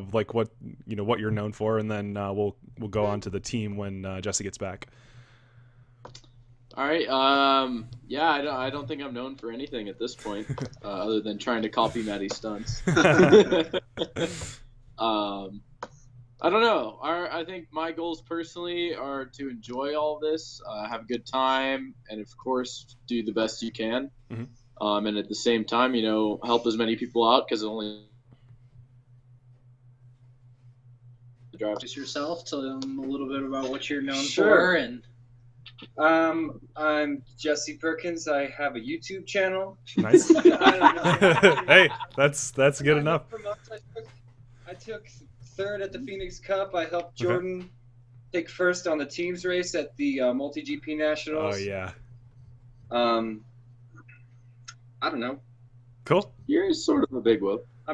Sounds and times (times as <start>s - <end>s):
Male speech, man speaking: 0.0s - 4.8s, 6.8s - 15.6s, 16.4s - 28.0s, 31.6s - 35.0s, 36.0s - 43.6s, 44.7s - 45.0s, 45.6s - 47.7s, 48.4s - 51.9s, 52.9s - 53.4s, 55.0s - 55.4s, 56.1s - 57.9s.